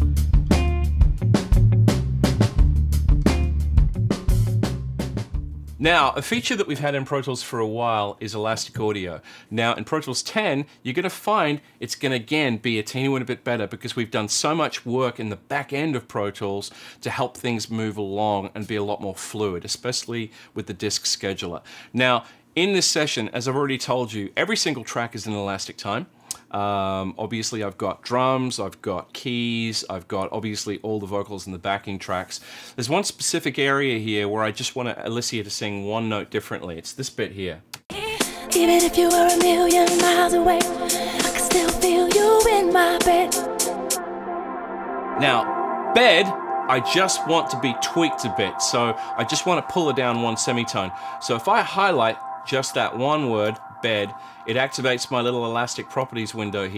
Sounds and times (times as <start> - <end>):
Speech: 5.8 - 37.6, 45.2 - 56.7.